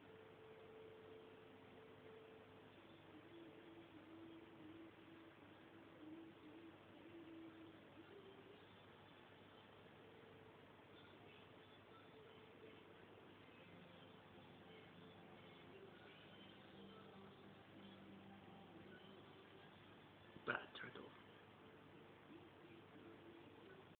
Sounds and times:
Speech: 0:20.4 - 0:21.2.

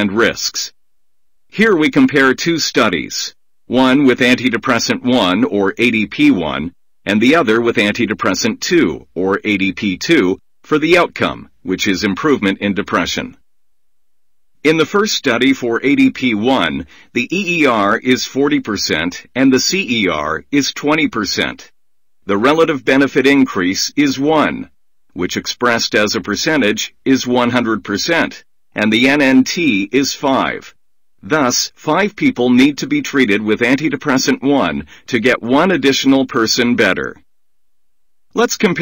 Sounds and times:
Speech: 0:00.0 - 0:00.8, 0:01.5 - 0:13.4, 0:14.6 - 0:21.7, 0:22.3 - 0:37.2, 0:38.3 - 0:38.8.

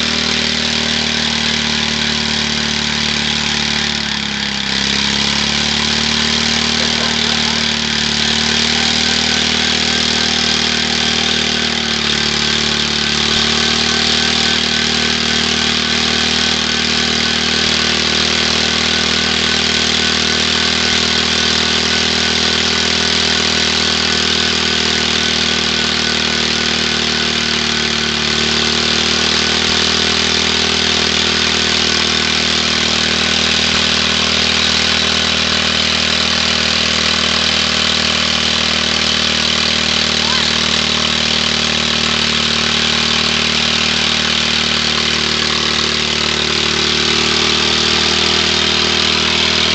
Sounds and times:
Vehicle: 0:00.0 - 0:49.7.

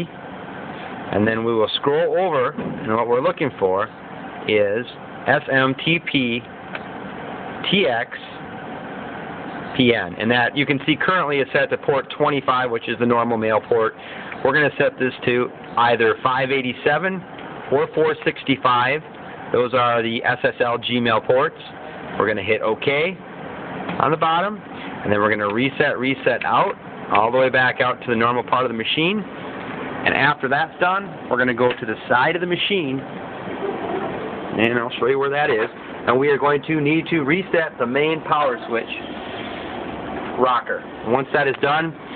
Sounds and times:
Speech: 0:01.1 - 0:06.5, 0:07.6 - 0:08.4, 0:09.7 - 0:23.2, 0:24.0 - 0:29.3, 0:30.0 - 0:33.1, 0:34.6 - 0:39.1, 0:40.4 - 0:42.0.

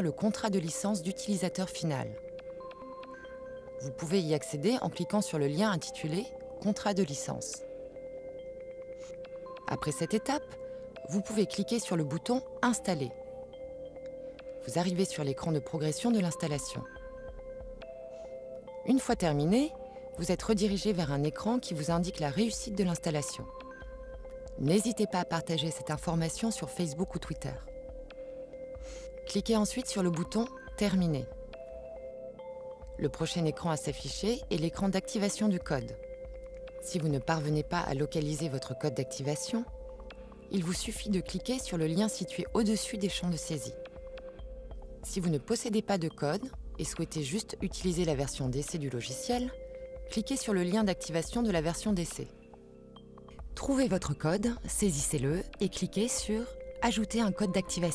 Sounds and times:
Speech: 0:00.0 - 0:02.2, 0:03.8 - 0:07.6, 0:09.7 - 0:13.2, 0:14.7 - 0:16.9, 0:18.8 - 0:23.5, 0:24.6 - 0:27.7, 0:29.3 - 0:31.3, 0:33.0 - 0:36.0, 0:36.8 - 0:39.7, 0:40.5 - 0:43.8, 0:45.1 - 0:52.3, 0:53.6 - 0:57.9
Music: 0:00.0 - 0:57.9.

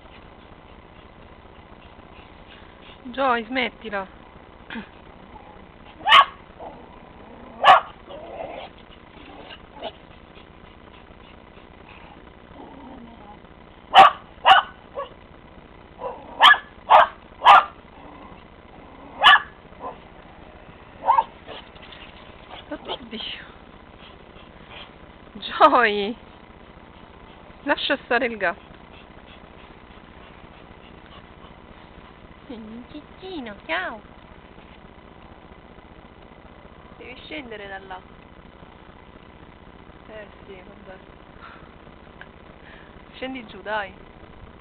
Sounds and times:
Speech: 0:03.0 - 0:04.1, 0:22.7 - 0:23.6, 0:25.4 - 0:26.2, 0:27.6 - 0:28.6, 0:32.5 - 0:34.0, 0:37.0 - 0:38.0, 0:40.1 - 0:41.0, 0:43.1 - 0:44.0
Bow-wow: 0:05.9 - 0:06.8, 0:07.5 - 0:10.0, 0:13.9 - 0:15.2, 0:16.0 - 0:17.8, 0:19.1 - 0:20.0, 0:21.0 - 0:21.6.

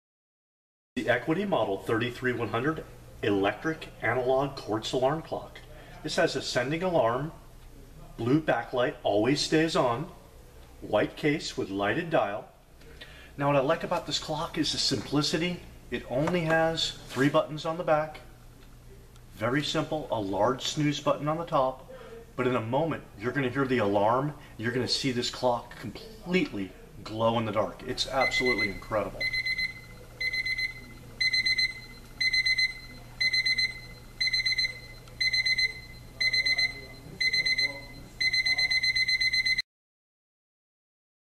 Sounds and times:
Speech: 0:01.0 - 0:29.4, 0:34.6 - 0:38.8.

